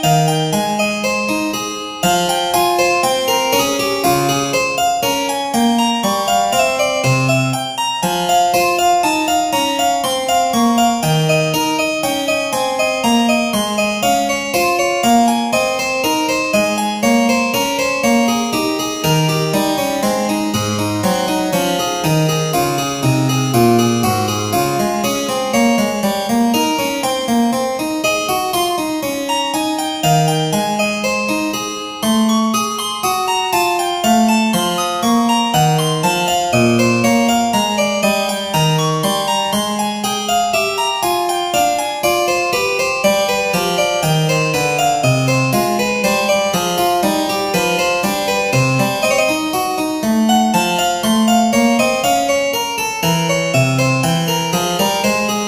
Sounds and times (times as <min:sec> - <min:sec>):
Music: 0:00.0 - 0:55.4.